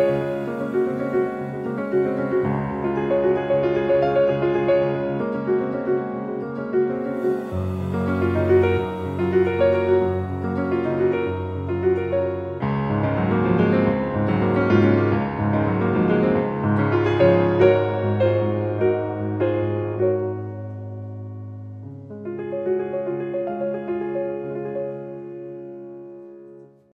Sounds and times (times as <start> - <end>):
Music: 0.0 - 26.9.